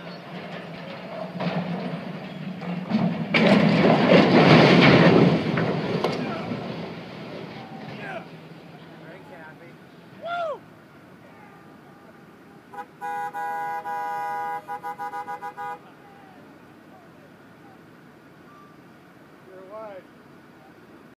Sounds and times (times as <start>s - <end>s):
Speech: 19.5s - 20.8s.